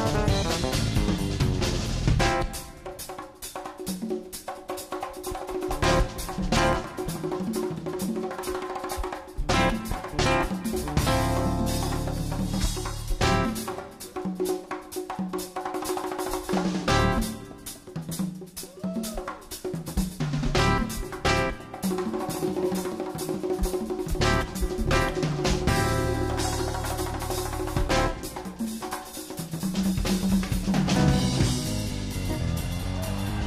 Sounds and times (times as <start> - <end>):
Inside, public space: 0.0 - 33.4
Music: 0.0 - 33.4
Inside, large room or hall: 2.4 - 33.4.